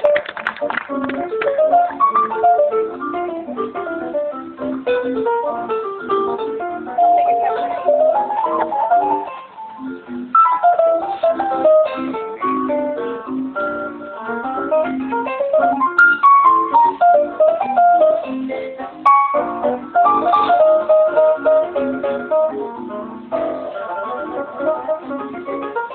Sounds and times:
Musical instrument: 0:00.9 - 0:25.9
Speech: 0:07.0 - 0:08.0.

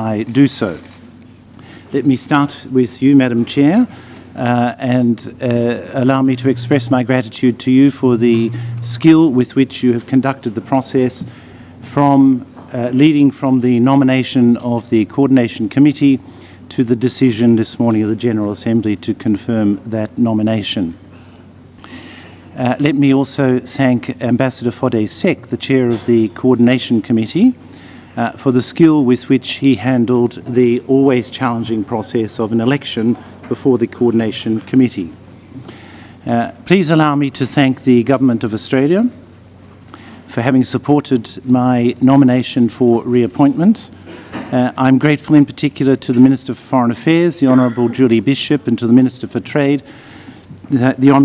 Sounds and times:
Male speech, man speaking: 0:00.0 - 0:00.9, 0:01.9 - 0:21.0, 0:22.6 - 0:27.6, 0:28.2 - 0:35.2, 0:36.2 - 0:39.2, 0:40.3 - 0:43.9, 0:44.5 - 0:49.8, 0:50.7 - 0:51.2
Narration, monologue: 0:00.0 - 0:51.2.

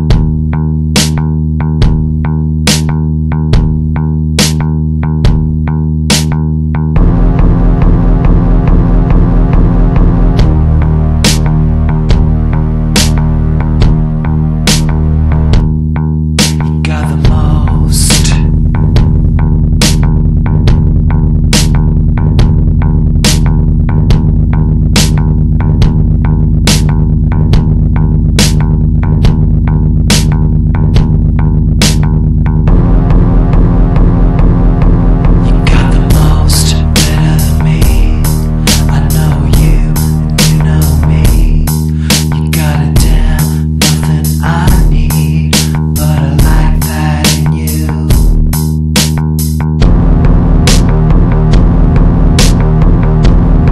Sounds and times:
Music: 0:00.0 - 0:53.7.

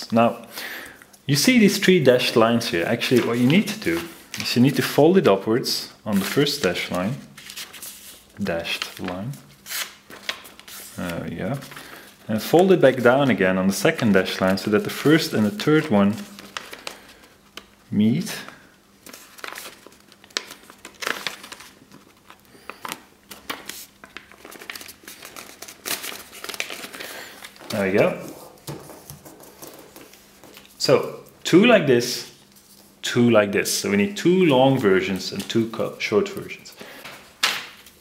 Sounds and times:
Speech: 0:00.0 - 0:00.5, 0:01.3 - 0:07.3, 0:08.4 - 0:09.4, 0:11.0 - 0:11.7, 0:12.3 - 0:16.3, 0:17.9 - 0:18.6, 0:27.7 - 0:28.4, 0:30.8 - 0:32.4, 0:33.0 - 0:36.8
Inside, small room: 0:00.0 - 0:38.0.

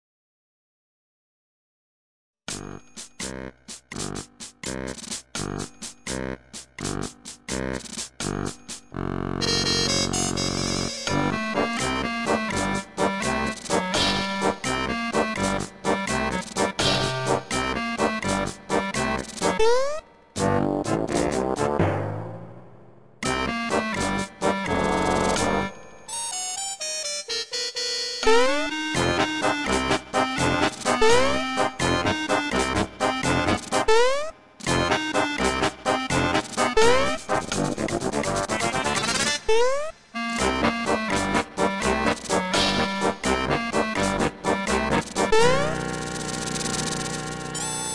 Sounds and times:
Music: 0:02.5 - 0:47.9.

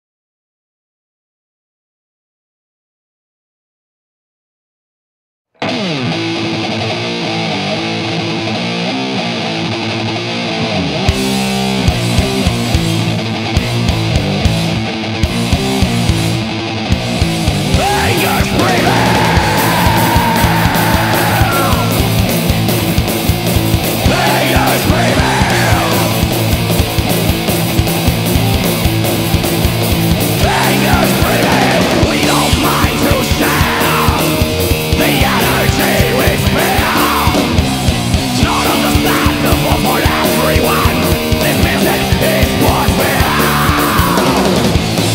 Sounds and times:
Music: 0:05.5 - 0:45.1.

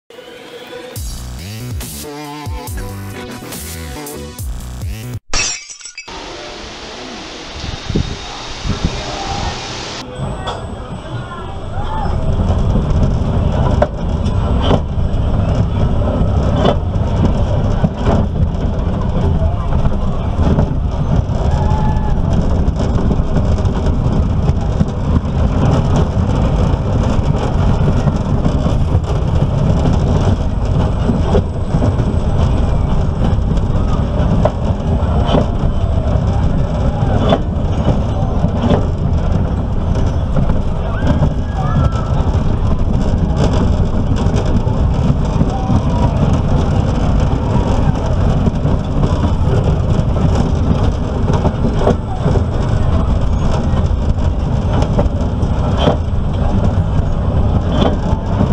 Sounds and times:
Music: 0:00.1 - 0:05.2
Breaking: 0:05.3 - 0:06.1.

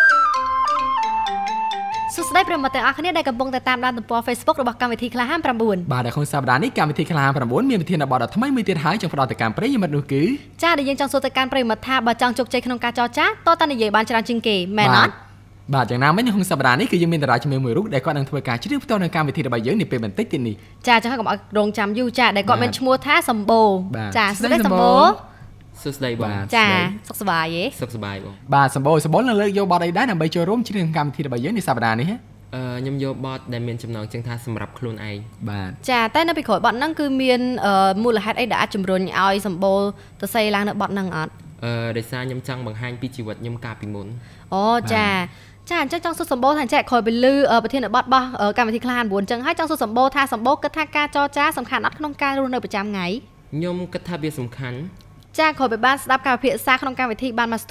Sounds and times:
Speech: 0:10.8 - 0:18.3, 0:22.3 - 0:23.2, 0:24.0 - 0:25.2, 0:25.8 - 0:30.1, 0:44.6 - 0:46.0.

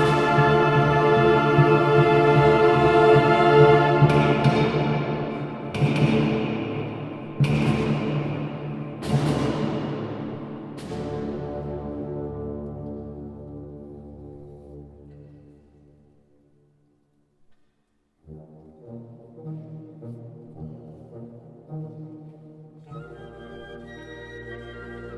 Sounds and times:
Brass instrument: 0:00.0 - 0:16.0, 0:18.2 - 0:25.1
Classical music: 0:00.0 - 0:16.9, 0:18.1 - 0:25.1.

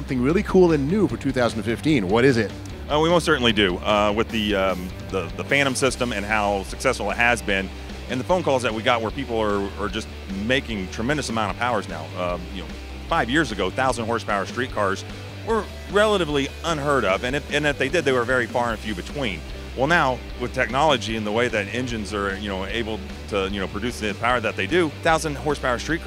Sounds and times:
Music: 0:00.0 - 0:26.0
Speech: 0:00.0 - 0:26.0.

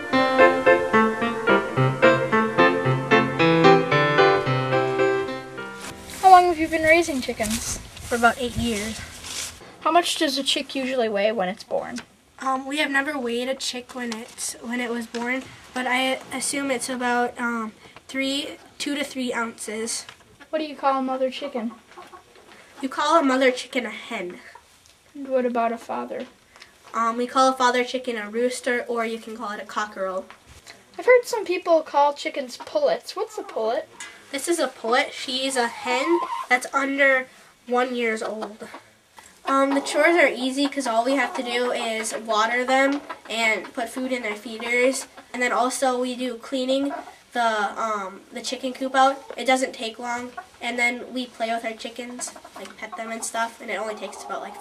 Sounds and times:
Speech: 0:06.2 - 0:09.1, 0:09.8 - 0:21.8, 0:22.8 - 0:24.6, 0:25.2 - 0:26.3, 0:26.9 - 0:30.3, 0:30.9 - 0:38.8, 0:39.5 - 0:54.6.

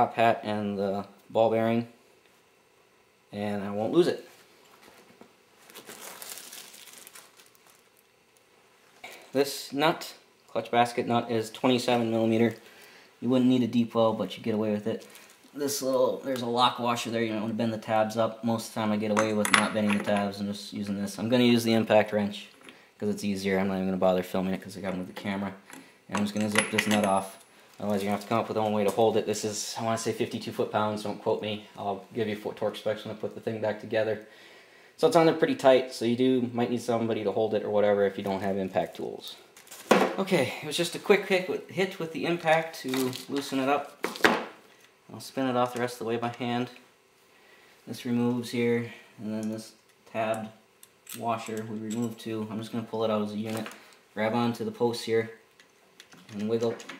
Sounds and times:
Speech: 0:00.0 - 0:02.0, 0:03.3 - 0:04.3, 0:09.1 - 0:12.6, 0:13.2 - 0:34.3, 0:35.0 - 0:39.5, 0:40.1 - 0:44.0, 0:45.1 - 0:46.8, 0:47.9 - 0:55.4, 0:56.3 - 0:56.9.

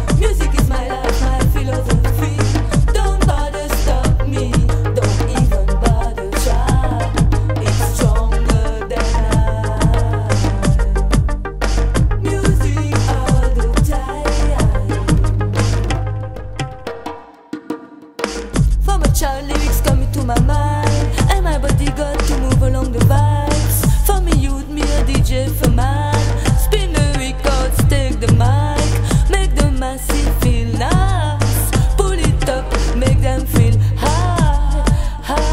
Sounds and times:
Music: 0:00.0 - 0:35.5.

